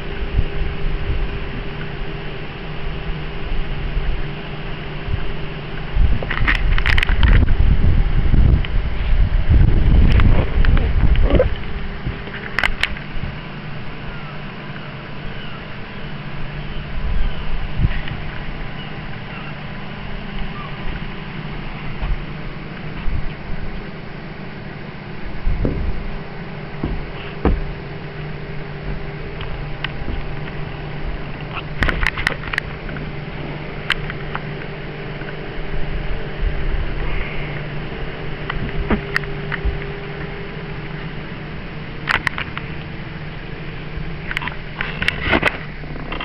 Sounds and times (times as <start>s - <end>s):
Vehicle: 0.0s - 46.2s.